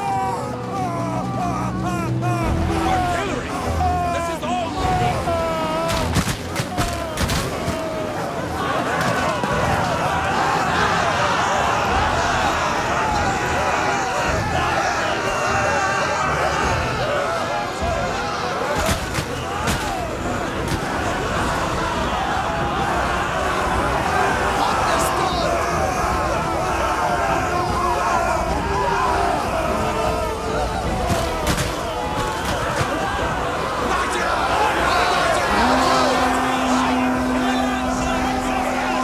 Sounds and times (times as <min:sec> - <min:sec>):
Music: 0:00.0 - 0:39.0
Speech: 0:00.2 - 0:06.1, 0:24.6 - 0:25.7, 0:33.8 - 0:39.0.